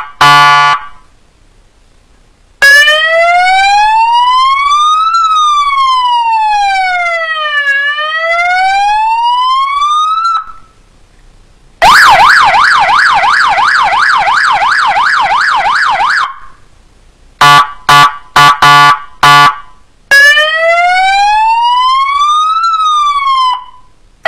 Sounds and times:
Ambulance (siren): 2.6s - 10.8s, 11.8s - 16.5s, 20.1s - 24.2s.

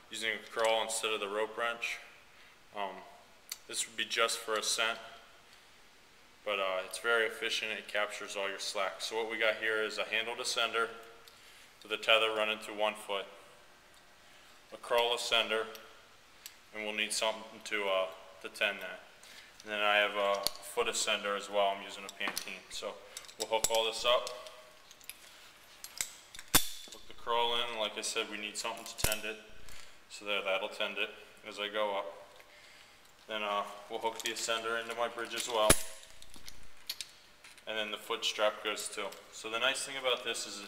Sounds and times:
Speech: 0.1s - 2.1s, 2.8s - 5.1s, 6.4s - 11.0s, 11.8s - 13.4s, 14.7s - 15.8s, 16.7s - 19.0s, 19.6s - 24.4s, 27.0s - 29.5s, 30.1s - 32.3s, 33.3s - 35.9s, 37.6s - 40.6s.

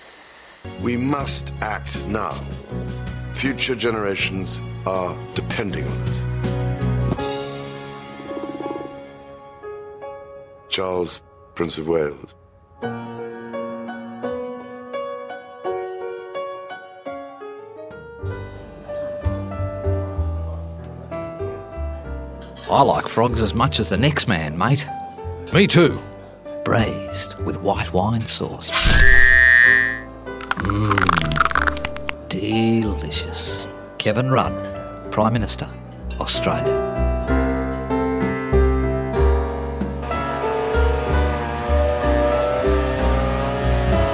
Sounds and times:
Music: 0.6s - 44.1s
Speech: 0.8s - 2.5s, 3.4s - 6.2s, 10.7s - 12.4s, 22.7s - 26.0s, 26.6s - 28.7s, 32.3s - 36.7s.

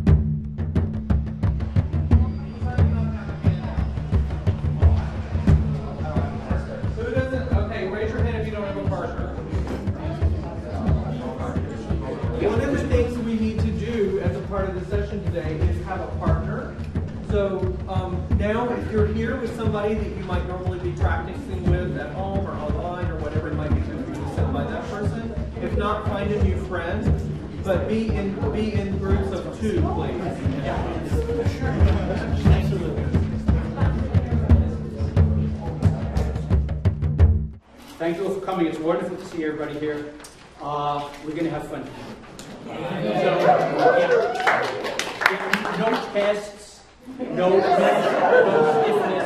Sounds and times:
Speech: 4.8s - 36.5s, 38.0s - 49.2s.

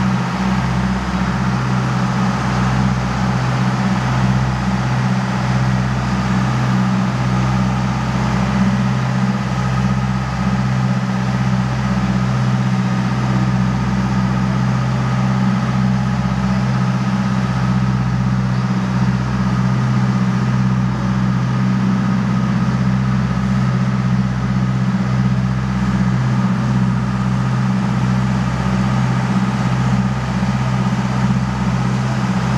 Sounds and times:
Motorboat, speedboat: 0.0s - 32.5s.

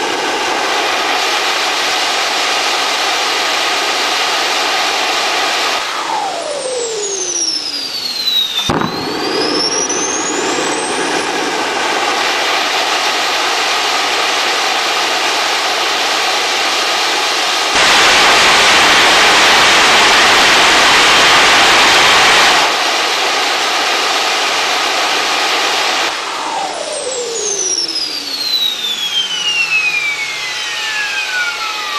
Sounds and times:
Engine: 0.0s - 31.9s.

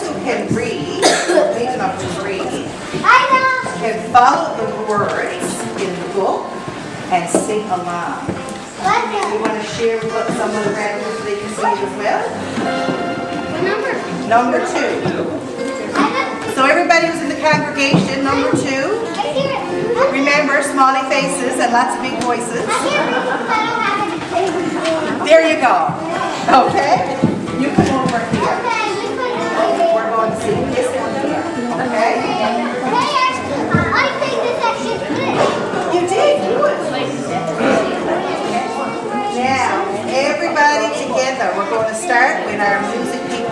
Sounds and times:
Music: 0.0s - 43.5s.

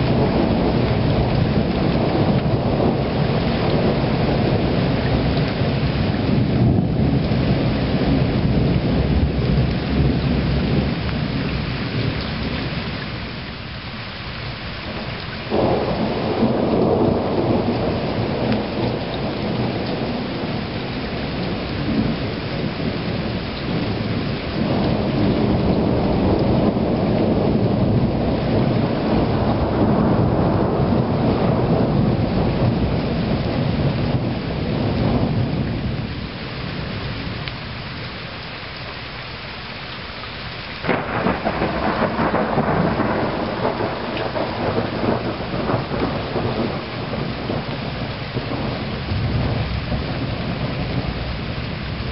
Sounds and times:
Thunder: 0.0s - 11.1s, 15.5s - 36.1s, 40.8s - 52.1s
Rain on surface: 0.0s - 52.1s.

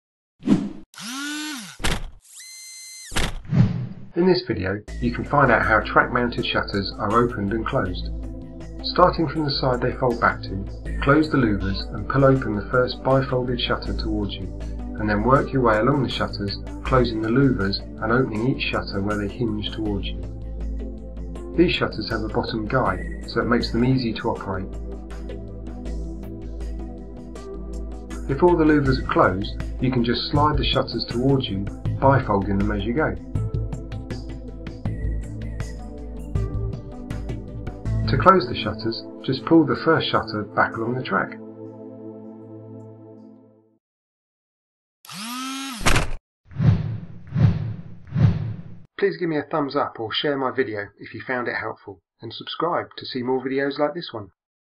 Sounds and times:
Speech: 4.2s - 8.1s, 8.8s - 20.2s, 21.6s - 24.7s, 28.3s - 33.2s, 38.0s - 41.4s, 49.0s - 54.4s
Music: 4.2s - 43.8s.

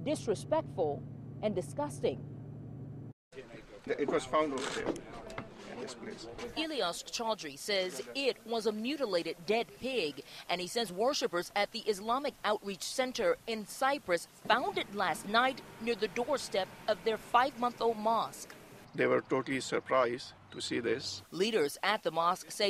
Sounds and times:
Speech: 0.0s - 2.2s, 3.4s - 18.4s, 19.0s - 22.6s.

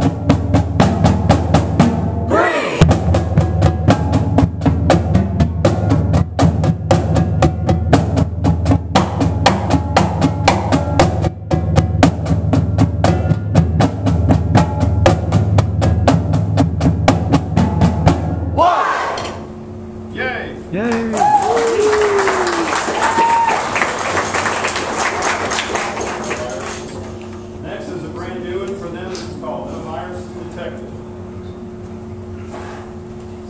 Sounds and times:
Bass drum: 0.0s - 18.6s.

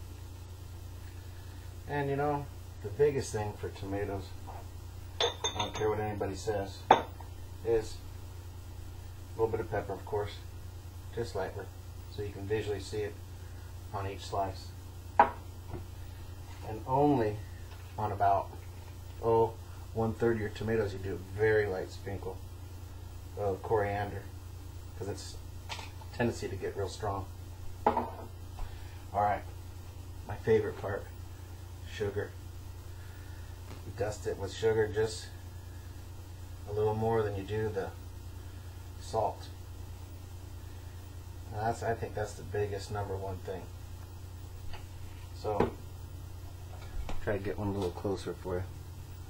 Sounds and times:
Speech: 1.9s - 4.4s, 5.6s - 6.9s, 7.6s - 8.0s, 9.4s - 10.5s, 11.1s - 13.2s, 13.9s - 14.8s, 16.6s - 17.4s, 18.0s - 18.6s, 19.2s - 22.4s, 23.4s - 24.4s, 25.0s - 25.4s, 26.1s - 27.3s, 29.1s - 29.5s, 30.3s - 31.1s, 31.8s - 32.4s, 33.9s - 35.4s, 36.7s - 38.0s, 39.0s - 39.6s, 41.5s - 43.7s, 45.4s - 45.8s, 47.2s - 48.7s.

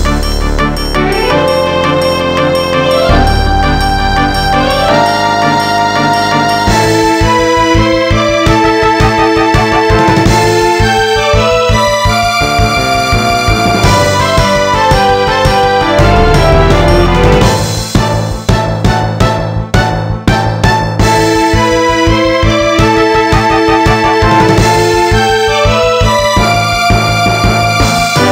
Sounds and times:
Music: 0.0s - 28.3s.

